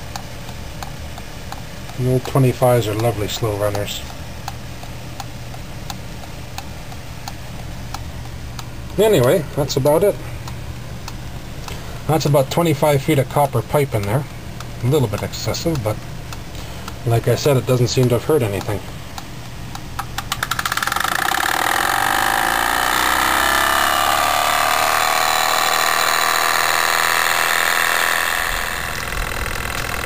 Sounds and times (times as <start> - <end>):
Speech: 2.0 - 4.1, 9.0 - 10.3, 12.1 - 16.0, 17.0 - 18.9.